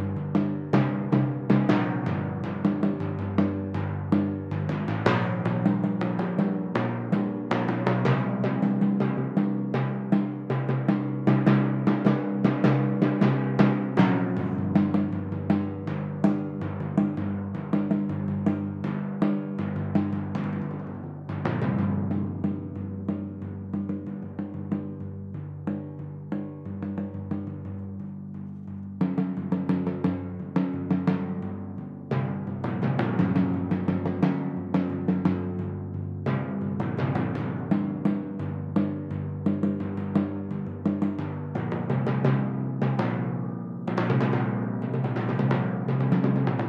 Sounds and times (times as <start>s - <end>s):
Timpani: 0.0s - 25.0s
Drum kit: 0.0s - 46.6s.